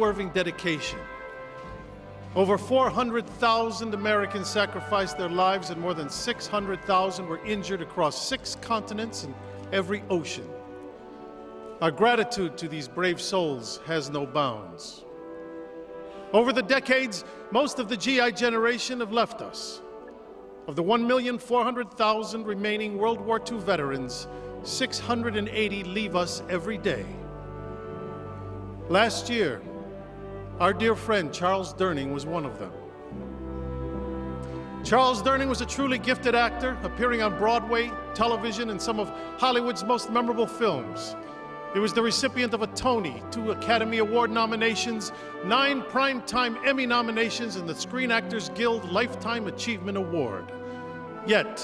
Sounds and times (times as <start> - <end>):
Speech: 0.0 - 1.0, 2.4 - 10.5, 11.8 - 15.0, 16.4 - 19.8, 20.7 - 27.2, 28.9 - 29.7, 30.6 - 32.8, 34.8 - 41.2, 41.8 - 50.5, 51.3 - 51.6
Music: 0.0 - 51.6.